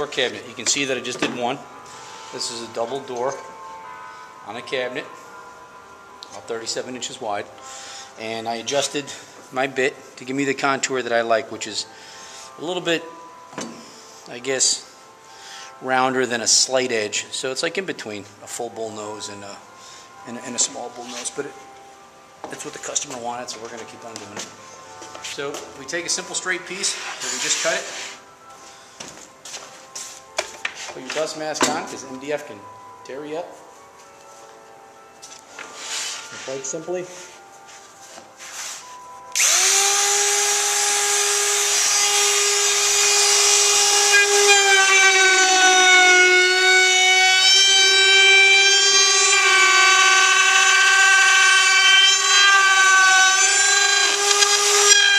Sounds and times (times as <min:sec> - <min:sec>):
Music: 0:00.0 - 0:55.1
Speech: 0:31.0 - 0:33.6, 0:36.4 - 0:37.2.